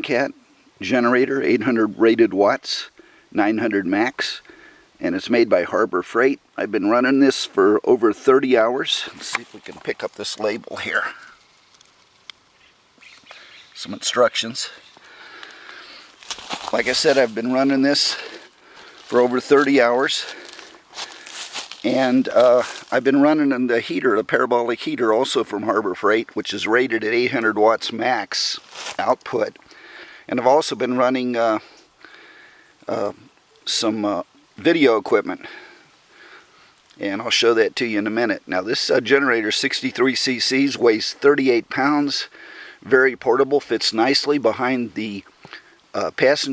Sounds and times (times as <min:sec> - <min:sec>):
Speech: 0:00.0 - 0:11.4, 0:13.8 - 0:14.8, 0:16.6 - 0:18.5, 0:19.1 - 0:20.5, 0:21.8 - 0:29.6, 0:30.3 - 0:31.8, 0:32.9 - 0:35.7, 0:37.0 - 0:45.3, 0:45.9 - 0:46.5.